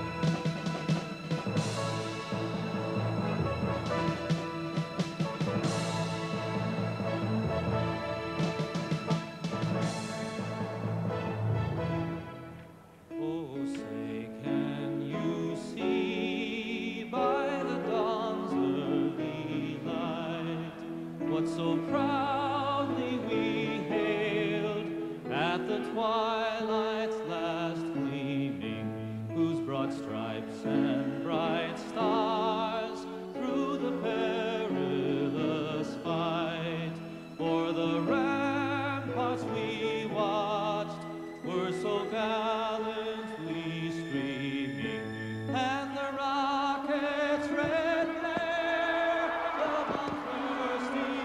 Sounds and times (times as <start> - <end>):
Opera: 0.0 - 51.2.